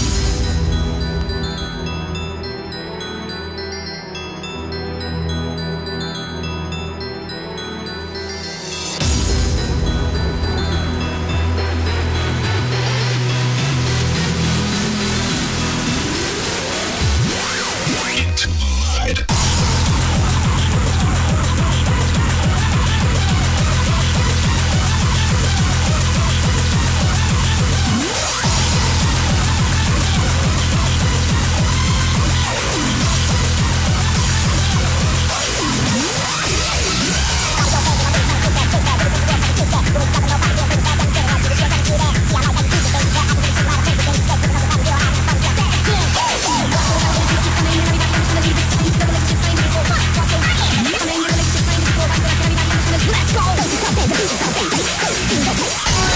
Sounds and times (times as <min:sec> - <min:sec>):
Pop music: 0:00.0 - 0:56.1.